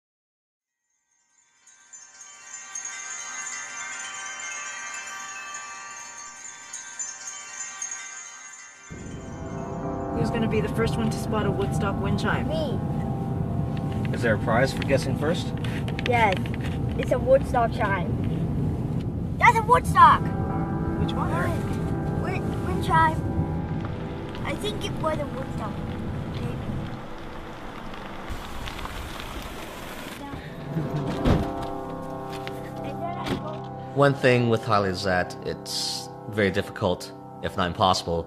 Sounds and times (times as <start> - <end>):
Wind chime: 0.8 - 16.4.